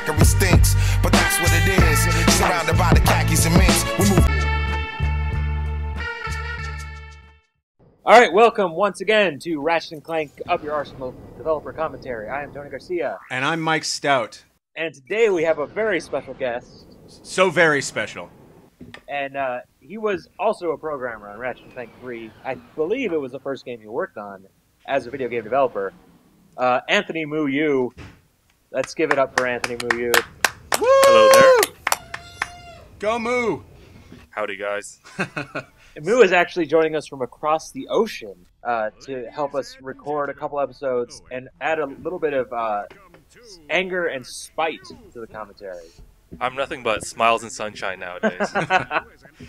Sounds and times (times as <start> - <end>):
Speech: 8.1 - 18.3, 19.1 - 25.9, 26.6 - 27.9, 28.8 - 30.2, 34.4 - 35.0, 36.0 - 49.4.